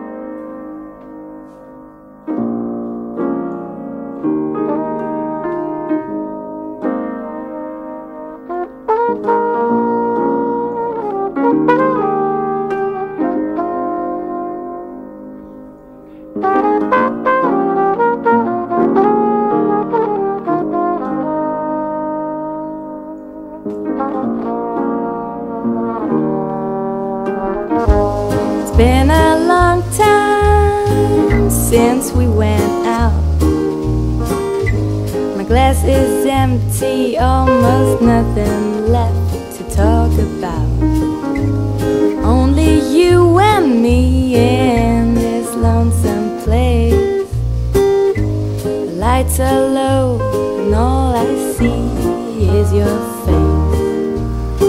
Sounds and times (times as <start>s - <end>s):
Music: 0.0s - 54.6s.